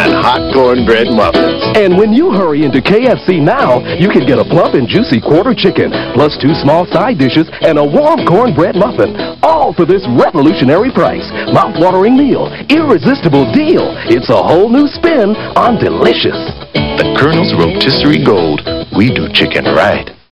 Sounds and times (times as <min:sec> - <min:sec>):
Music: 0:00.0 - 0:20.3
Speech: 0:17.0 - 0:20.2.